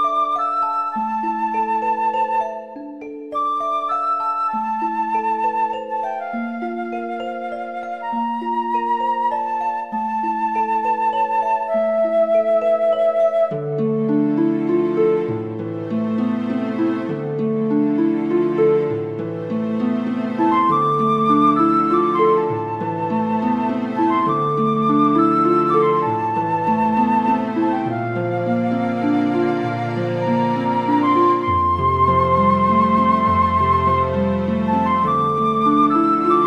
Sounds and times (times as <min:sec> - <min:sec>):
Flute: 0:00.0 - 0:36.4.